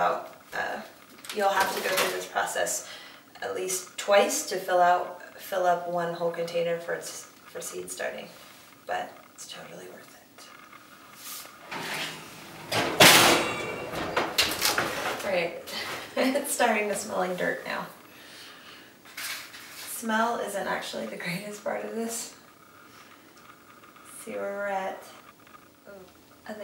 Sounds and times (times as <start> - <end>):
Speech: 0.0 - 8.3, 8.9 - 10.5, 15.2 - 18.0, 19.9 - 22.4, 24.2 - 25.2
Inside, small room: 0.0 - 26.6.